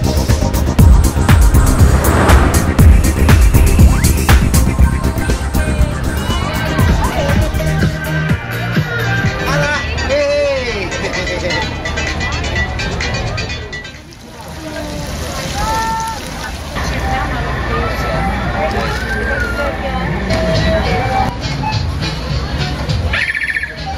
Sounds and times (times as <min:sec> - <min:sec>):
Music: 0:00.0 - 0:14.2, 0:16.8 - 0:23.9.